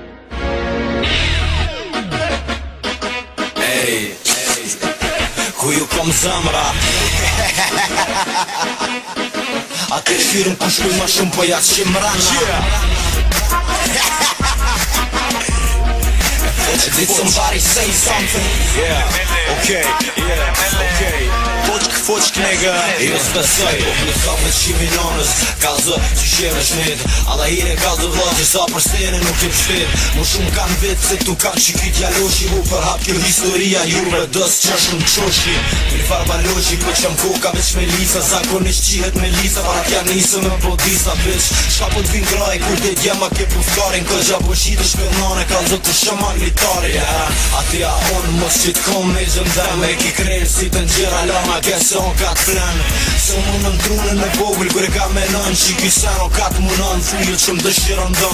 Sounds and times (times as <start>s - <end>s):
Music: 0.0s - 58.3s.